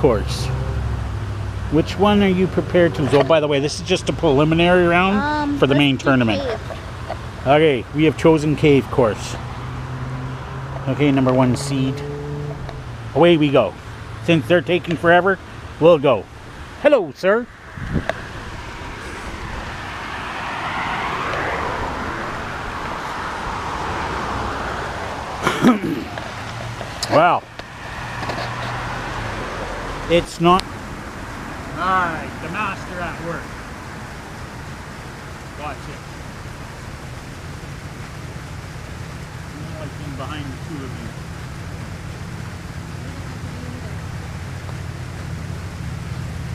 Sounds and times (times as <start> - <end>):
Field recording: 0.0 - 46.5.